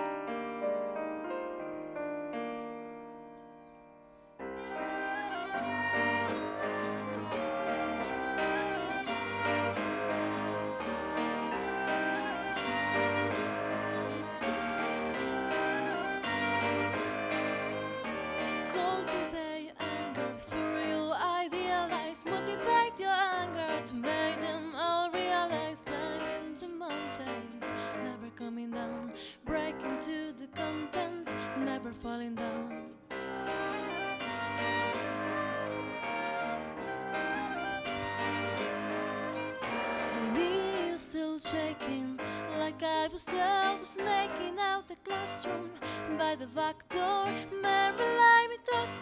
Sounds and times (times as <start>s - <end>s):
Music: 0.0s - 49.0s.